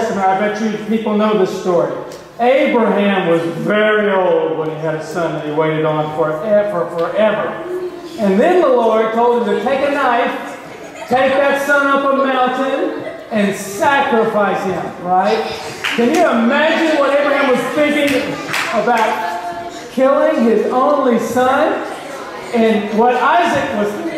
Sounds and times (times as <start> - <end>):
Speech: 0.0 - 24.1.